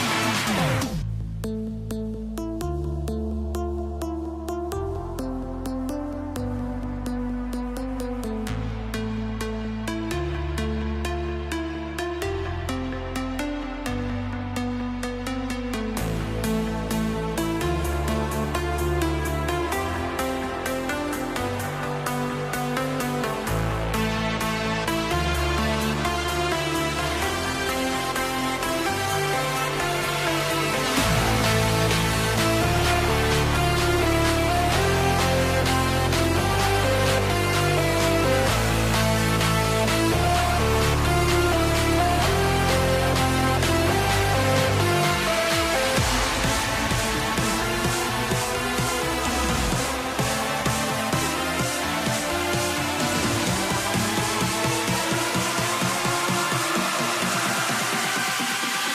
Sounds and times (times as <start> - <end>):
Music: 0.0 - 58.9.